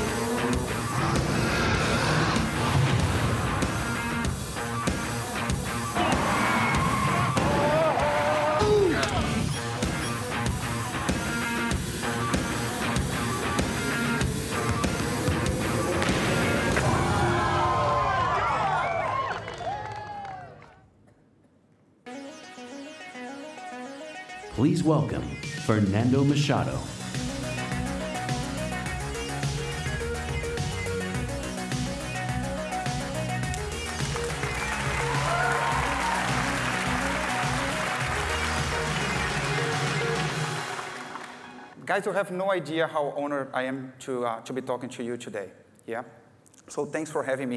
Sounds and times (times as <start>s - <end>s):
Music: 0.0s - 18.2s, 22.0s - 43.0s
Speech: 24.6s - 26.9s, 41.8s - 47.5s.